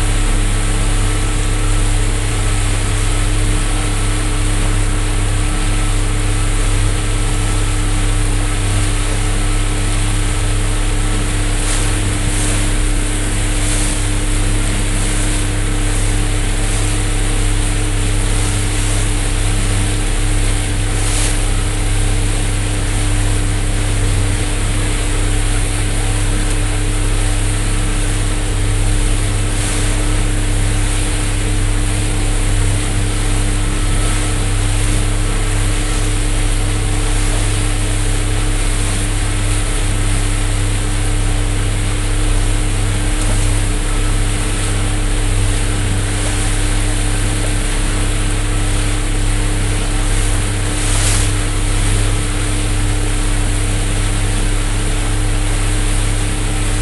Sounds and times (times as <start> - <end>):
Motorboat, speedboat: 0.0 - 56.8.